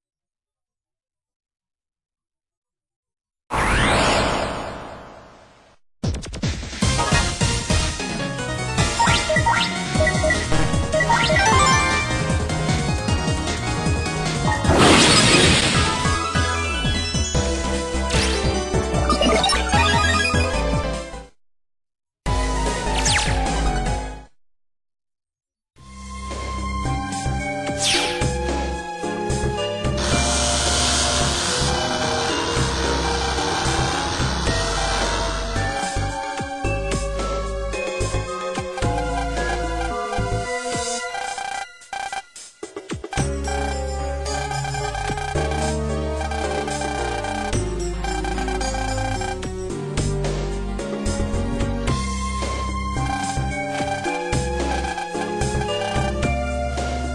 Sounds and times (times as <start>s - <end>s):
Music: 6.0s - 21.4s, 22.3s - 24.4s, 25.8s - 57.1s.